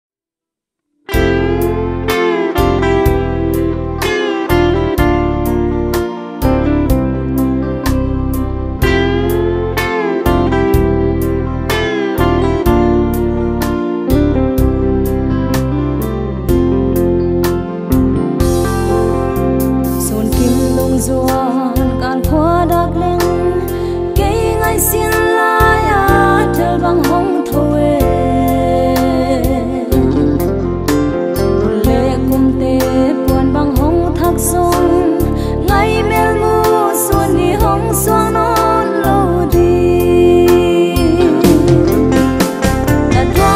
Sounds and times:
Steel guitar, slide guitar: 0:01.1 - 0:43.5.

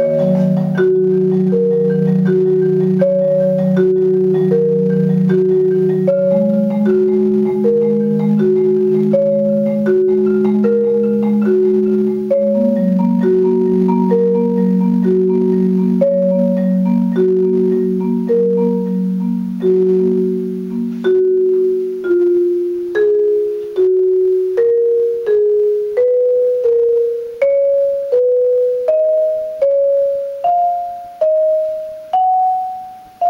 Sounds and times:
Marimba, xylophone: 0:00.0 - 0:33.3.

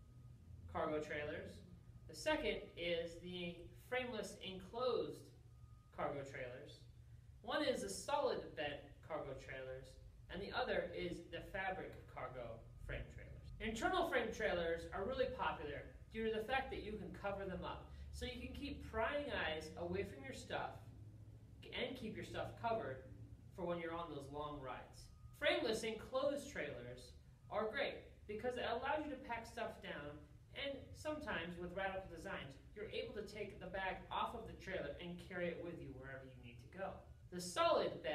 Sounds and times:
Speech: 0:00.7 - 0:05.3, 0:05.9 - 0:20.8, 0:21.6 - 0:38.1.

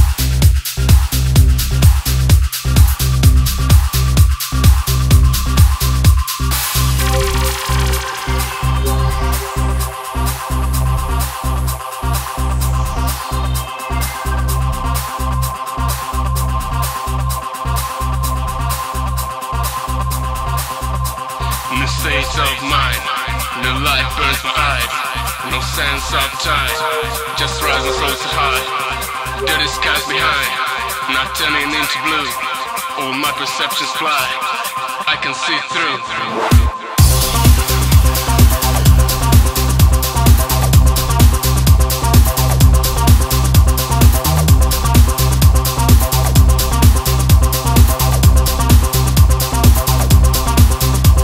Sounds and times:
House music: 0:00.0 - 0:17.6, 0:21.8 - 0:51.2.

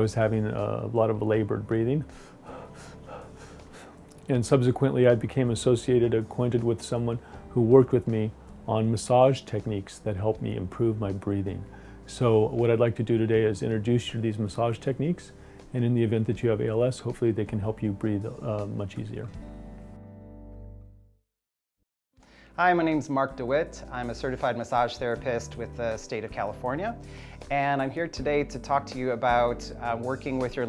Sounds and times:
Speech: 0:00.0 - 0:02.1, 0:04.3 - 0:19.3, 0:22.6 - 0:30.6.

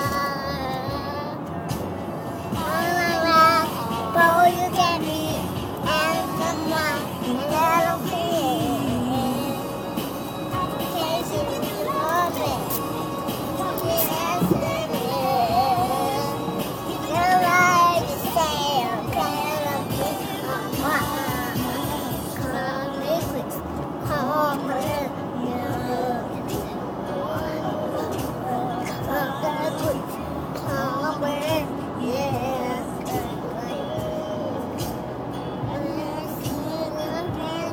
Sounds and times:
Child singing: 0:00.0 - 0:01.5, 0:02.5 - 0:09.7, 0:10.5 - 0:34.9, 0:35.7 - 0:37.7
Music: 0:00.0 - 0:37.7
Female singing: 0:02.6 - 0:09.8, 0:10.5 - 0:12.8, 0:13.5 - 0:34.6, 0:35.6 - 0:37.7.

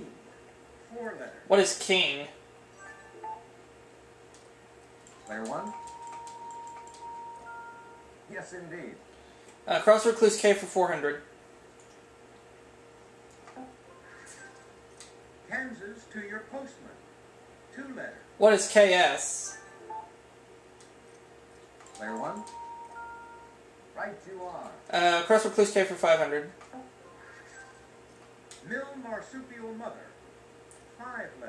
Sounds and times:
Television: 0:00.0 - 0:31.4
Speech: 0:09.7 - 0:11.3, 0:15.5 - 0:17.0, 0:24.0 - 0:26.5, 0:28.6 - 0:30.2.

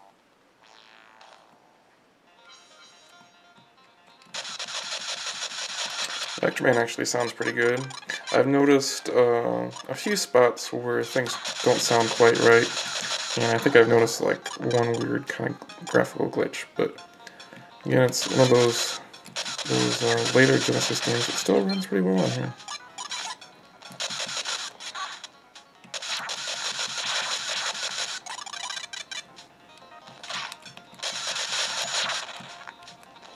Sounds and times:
Music: 0:00.0 - 0:33.3
Speech: 0:06.4 - 0:12.7, 0:13.4 - 0:16.9, 0:17.9 - 0:19.0, 0:19.7 - 0:22.5.

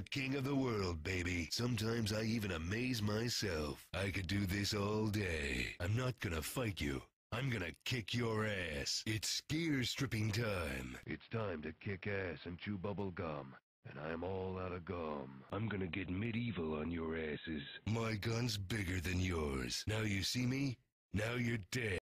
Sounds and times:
Speech: 0:00.0 - 0:22.0.

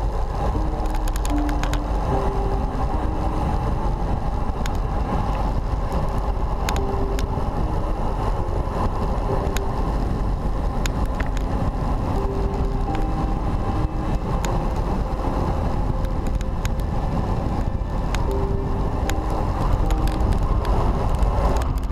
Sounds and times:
Music: 0:00.0 - 0:21.9
Vehicle: 0:00.0 - 0:21.9.

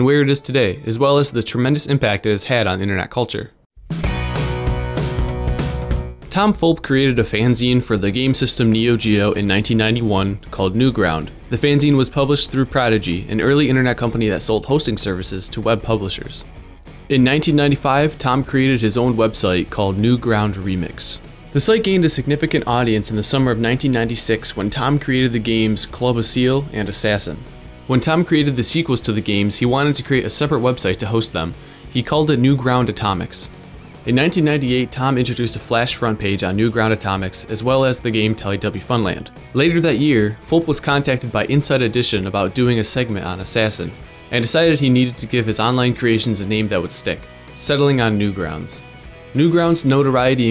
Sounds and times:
Music: 0:00.0 - 0:02.6, 0:03.2 - 0:50.5
Speech: 0:00.0 - 0:03.6, 0:06.3 - 0:16.5, 0:17.1 - 0:33.5, 0:34.1 - 0:48.8, 0:49.4 - 0:50.5.

